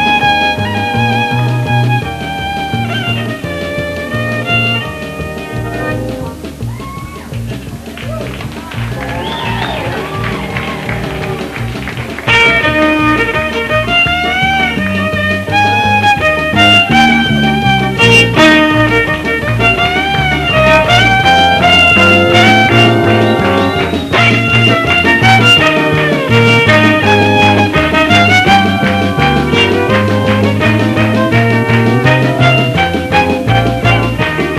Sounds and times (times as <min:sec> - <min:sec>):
Violin, fiddle: 0:00.0 - 0:07.3, 0:09.2 - 0:34.5.